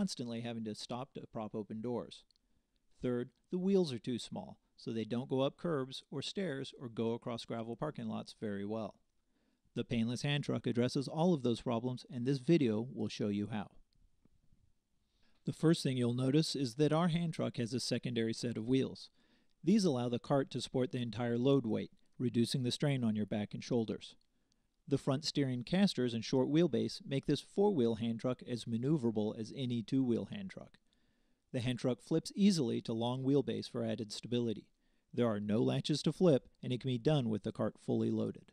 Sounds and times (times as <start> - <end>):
Speech: 0.0 - 2.3, 3.0 - 9.0, 9.8 - 13.8, 15.5 - 24.2, 24.9 - 30.8, 31.5 - 38.5.